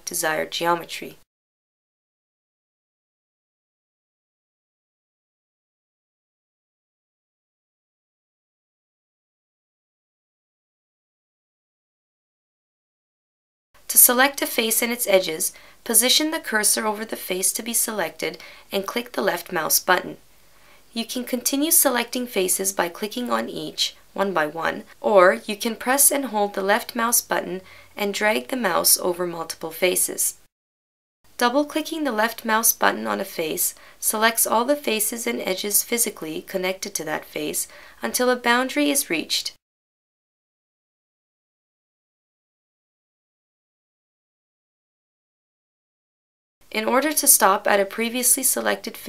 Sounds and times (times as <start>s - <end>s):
Speech: 0.0s - 1.2s, 13.9s - 20.2s, 20.9s - 30.4s, 31.4s - 39.6s, 46.7s - 49.0s.